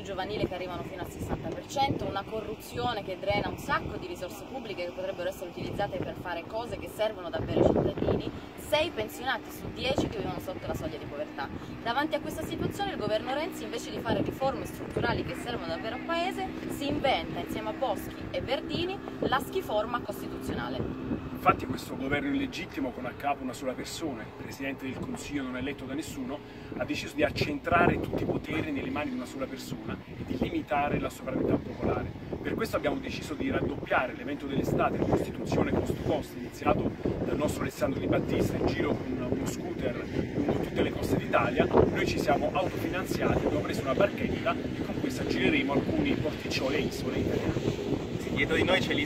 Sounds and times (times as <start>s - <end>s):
Speech: 0.0s - 20.8s, 21.4s - 47.6s, 48.3s - 49.0s
Sailboat, sailing ship: 0.0s - 49.0s.